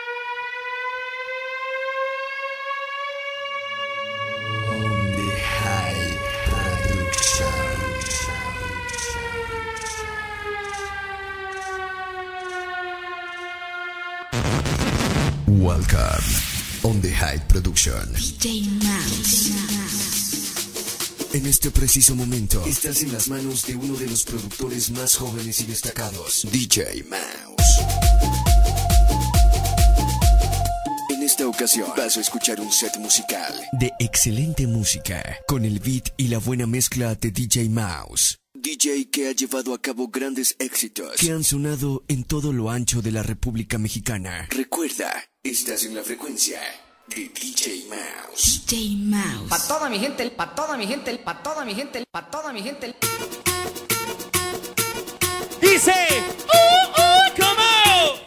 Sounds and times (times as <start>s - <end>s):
Speech: 4.7s - 7.8s, 15.5s - 20.2s, 21.3s - 27.8s, 31.1s - 53.0s, 55.6s - 58.2s
Music: 18.6s - 26.1s, 27.6s - 35.6s, 53.0s - 58.2s.